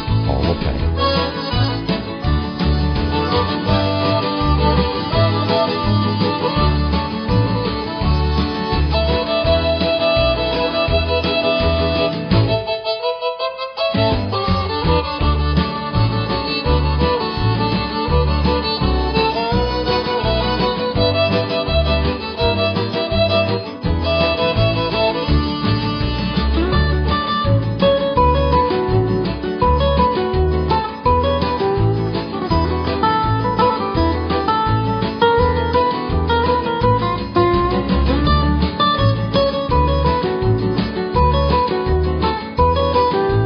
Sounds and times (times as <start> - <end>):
Musical instrument: 0.0 - 43.4.